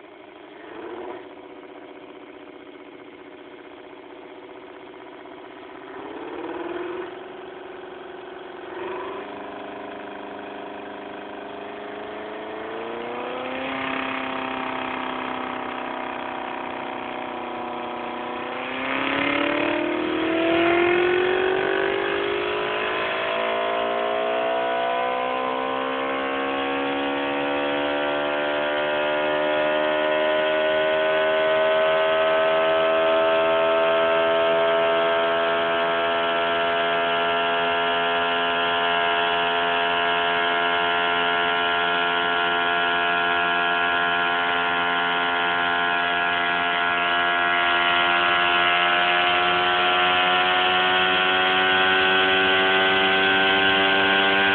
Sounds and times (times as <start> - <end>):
Engine: 0.0 - 54.5.